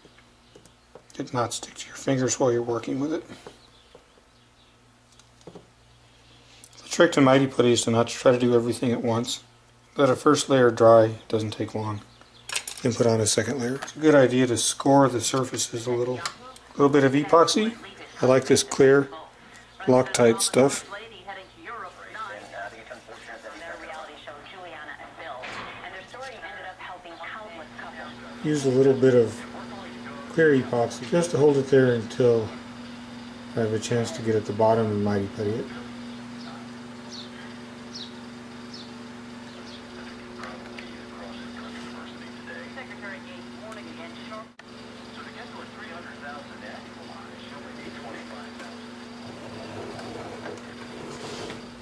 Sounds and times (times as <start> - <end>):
Speech: 1.2 - 3.4, 6.8 - 12.0, 12.8 - 32.6, 33.6 - 36.6, 40.0 - 48.8.